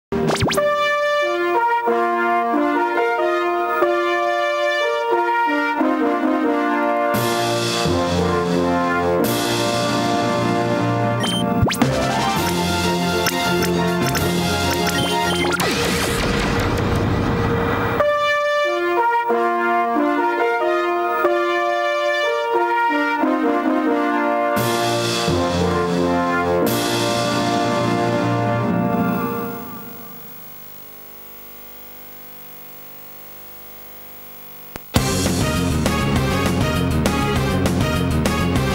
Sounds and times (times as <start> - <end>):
Trumpet: 0.5 - 15.6, 17.6 - 30.3, 35.0 - 38.7
Trombone: 0.6 - 15.6, 17.8 - 30.0.